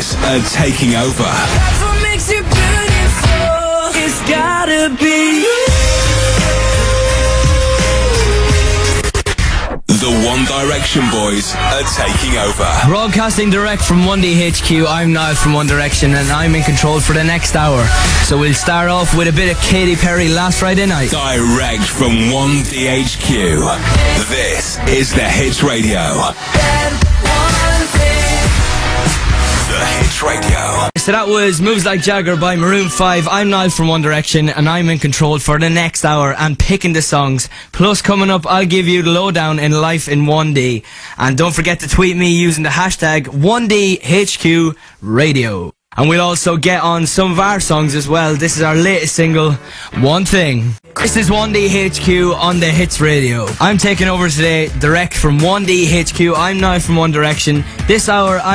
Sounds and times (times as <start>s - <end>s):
Speech: 0.0s - 1.7s, 9.9s - 26.4s, 29.7s - 58.5s
Music: 0.0s - 34.2s, 47.2s - 58.5s.